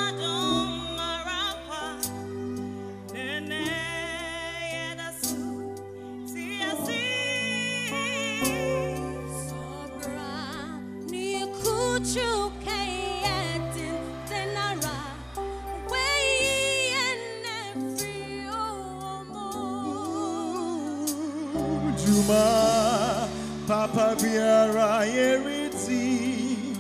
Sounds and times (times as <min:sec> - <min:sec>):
Female singing: 0:00.0 - 0:02.1, 0:03.2 - 0:05.6, 0:06.3 - 0:26.8
Music: 0:00.0 - 0:26.8.